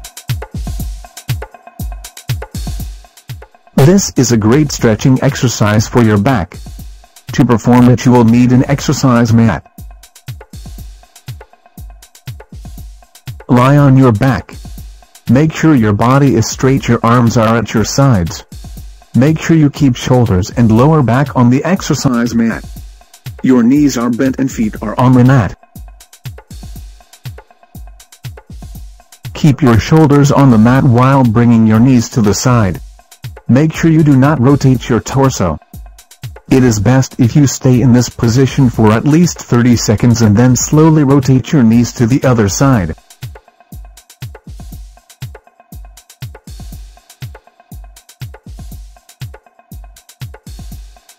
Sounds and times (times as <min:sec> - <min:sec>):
Speech synthesizer: 0:03.8 - 0:06.6, 0:07.4 - 0:09.6, 0:13.5 - 0:14.6, 0:15.3 - 0:18.4, 0:19.2 - 0:22.6, 0:23.4 - 0:25.6, 0:29.4 - 0:32.8, 0:33.5 - 0:35.6, 0:36.5 - 0:43.0.